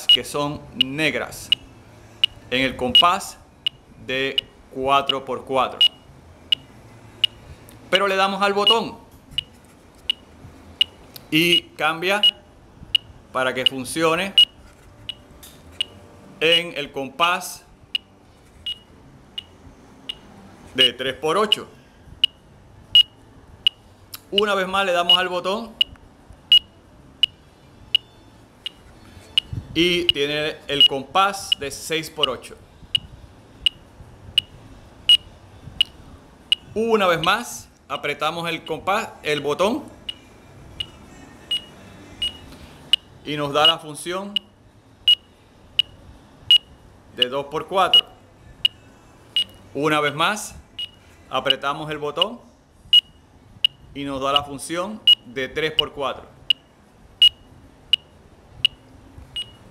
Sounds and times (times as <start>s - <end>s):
Speech: 0.1s - 1.5s, 2.5s - 3.4s, 4.0s - 5.9s, 7.9s - 9.0s, 11.3s - 12.4s, 16.4s - 17.7s, 20.8s - 21.7s, 24.3s - 25.8s, 29.8s - 32.6s, 36.7s - 40.0s, 43.3s - 44.4s, 47.2s - 48.2s, 49.8s - 50.6s, 51.3s - 52.5s, 54.0s - 56.4s.